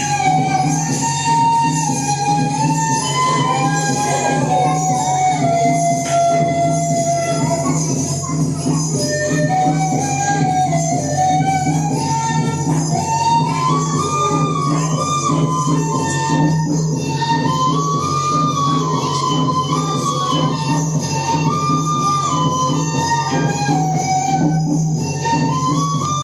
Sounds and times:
Speech: 0.0 - 16.5, 17.2 - 26.2
Music: 0.0 - 26.2.

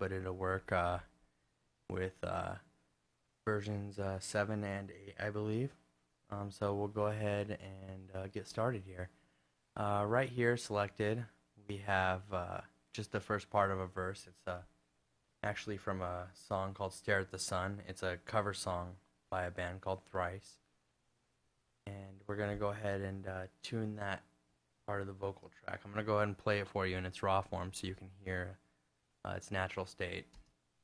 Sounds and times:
Speech: 0.0 - 1.1, 1.9 - 2.7, 3.4 - 9.1, 9.8 - 14.7, 15.4 - 20.6, 21.8 - 24.3, 24.9 - 28.6, 29.2 - 30.4.

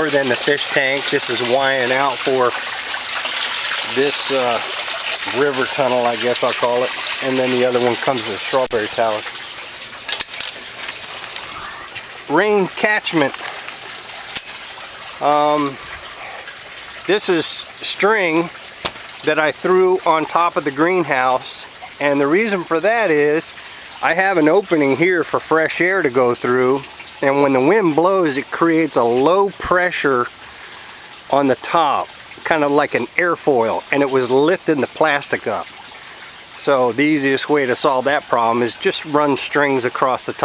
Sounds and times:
Speech: 0.0 - 2.6, 3.9 - 9.3, 11.5 - 13.4, 15.2 - 15.8, 17.1 - 18.5, 19.2 - 30.3, 31.3 - 35.7, 36.6 - 40.4
Liquid: 0.0 - 40.4
Outside, rural or natural: 0.0 - 40.4.

